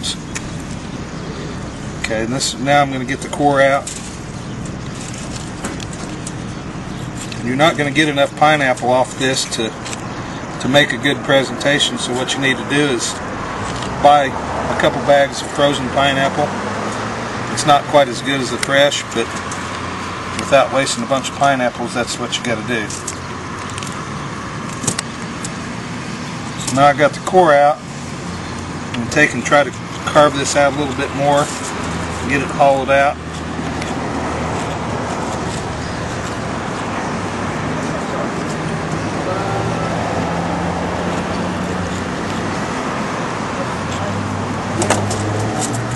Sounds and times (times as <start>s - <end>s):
Outside, urban or manmade: 0.0s - 45.9s
Speech: 2.0s - 3.9s, 7.4s - 9.8s, 10.6s - 13.2s, 14.0s - 16.5s, 17.5s - 19.3s, 20.4s - 23.0s, 26.7s - 27.8s, 29.0s - 31.5s, 32.2s - 33.2s, 39.2s - 40.1s.